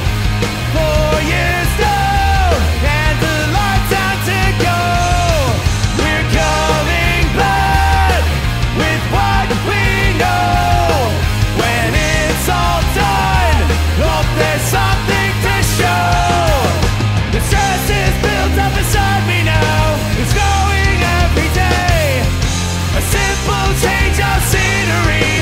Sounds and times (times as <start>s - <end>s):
Punk rock: 0.0s - 25.4s
Singing: 0.7s - 25.4s.